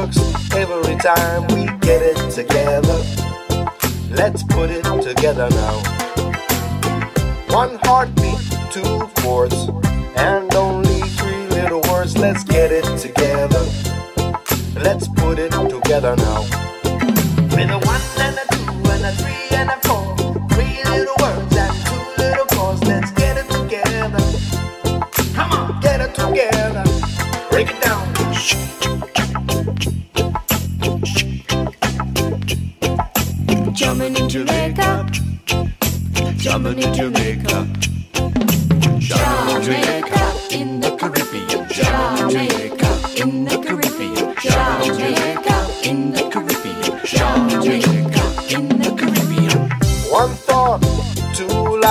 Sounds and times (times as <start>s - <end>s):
Music: 0.0s - 51.9s.